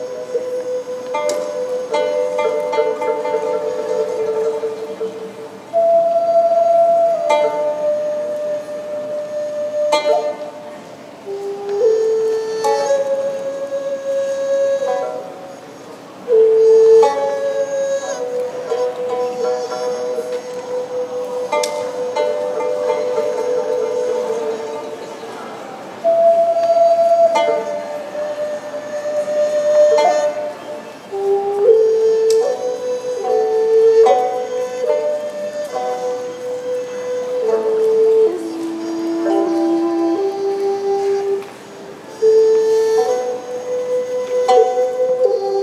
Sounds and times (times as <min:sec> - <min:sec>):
Middle Eastern music: 0:00.0 - 0:45.6
Traditional music: 0:00.0 - 0:45.6.